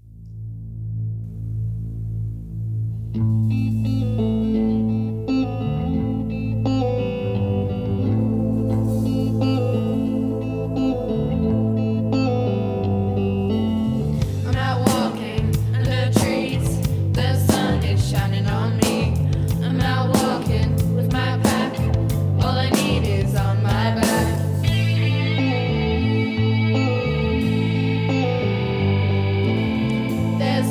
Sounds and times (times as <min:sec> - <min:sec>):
Bass guitar: 0:00.0 - 0:30.7.